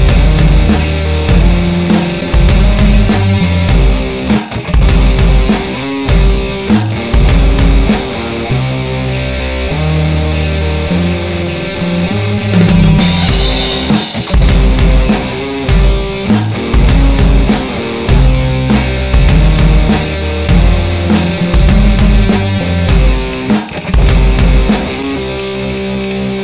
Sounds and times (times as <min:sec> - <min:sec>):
Music: 0:00.0 - 0:26.4.